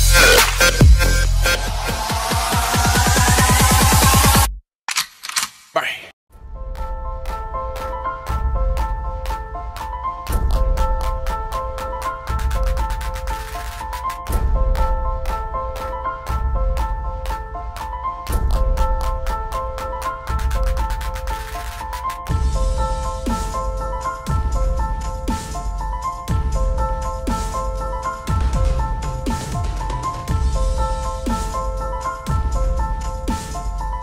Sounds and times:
Music: 0:00.0 - 0:04.6, 0:06.3 - 0:34.0.

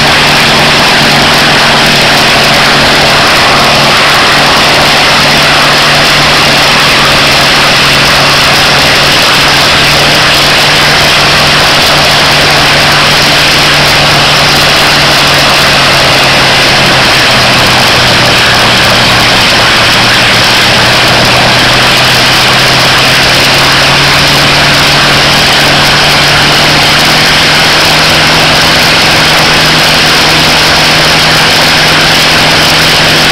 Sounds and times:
Heavy engine (low frequency): 0:00.0 - 0:33.3
Vehicle: 0:00.0 - 0:33.3.

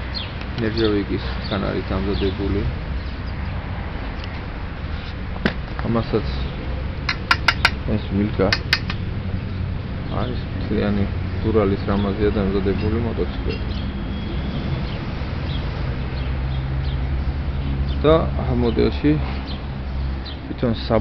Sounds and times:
Outside, rural or natural: 0:00.0 - 0:21.0
Speech: 0:00.6 - 0:02.8, 0:05.8 - 0:06.5, 0:07.9 - 0:08.6, 0:10.1 - 0:13.6, 0:18.0 - 0:19.3, 0:20.5 - 0:21.0.

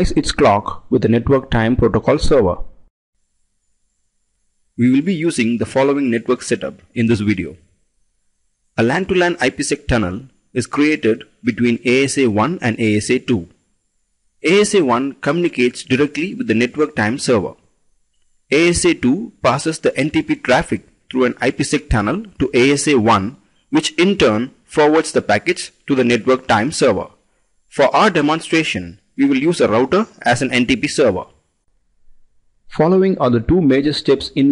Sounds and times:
Speech: 0:00.0 - 0:02.7, 0:04.8 - 0:07.6, 0:08.8 - 0:13.6, 0:14.4 - 0:17.6, 0:18.5 - 0:31.4, 0:32.7 - 0:34.5.

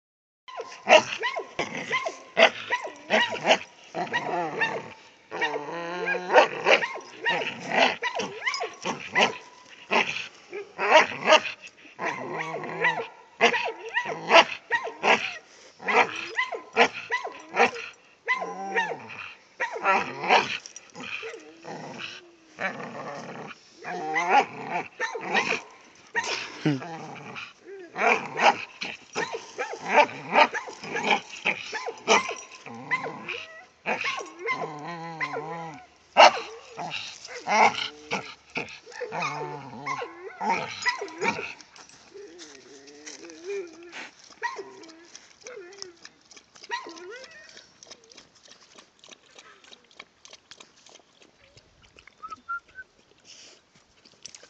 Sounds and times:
Bow-wow: 0:00.5 - 0:20.6, 0:23.8 - 0:26.8, 0:27.9 - 0:41.5, 0:43.5 - 0:45.9, 0:46.6 - 0:48.6.

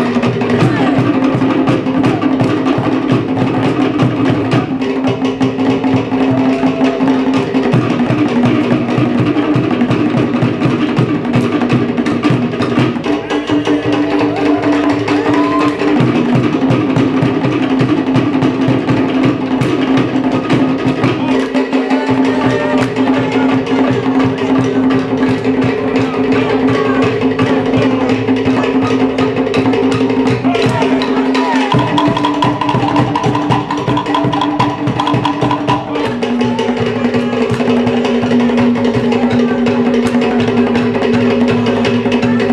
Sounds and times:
Drum: 0:00.0 - 0:42.5.

